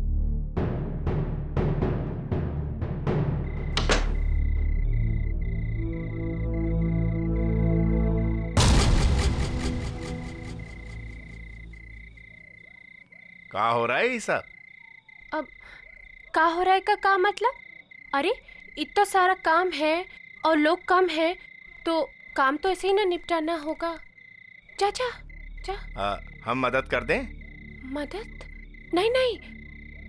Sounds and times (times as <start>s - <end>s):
Timpani: 8.6s - 11.4s.